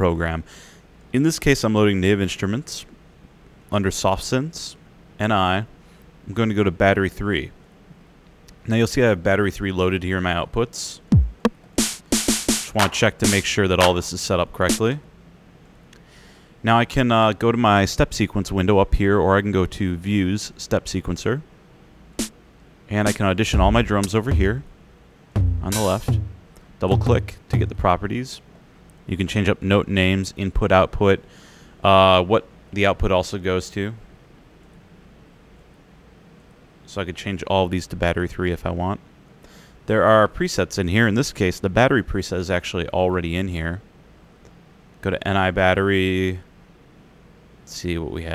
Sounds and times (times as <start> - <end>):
Speech: 0.0 - 0.5, 1.1 - 3.0, 3.7 - 7.6, 8.6 - 11.1, 12.7 - 15.1, 16.6 - 21.5, 22.9 - 24.7, 25.6 - 26.2, 26.8 - 28.5, 29.1 - 34.0, 36.8 - 39.0, 39.9 - 43.8, 45.0 - 46.5, 47.6 - 48.3
Drum: 11.1 - 14.1, 23.1 - 24.7, 25.4 - 27.9
Drum kit: 11.1 - 14.1, 23.0 - 24.7, 25.4 - 27.9.